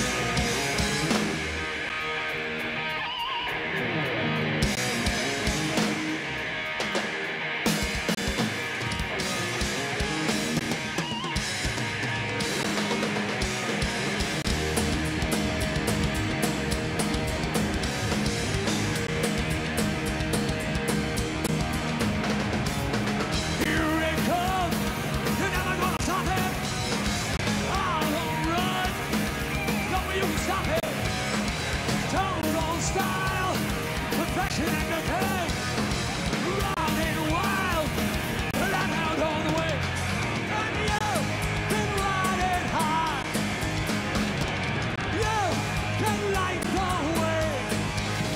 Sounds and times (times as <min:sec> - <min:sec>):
Music: 0:00.0 - 0:48.3.